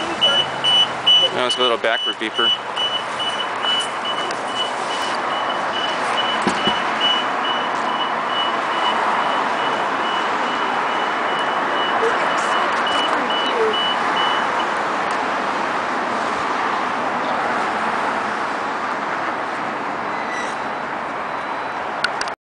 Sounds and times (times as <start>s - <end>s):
Car: 0.0s - 22.4s.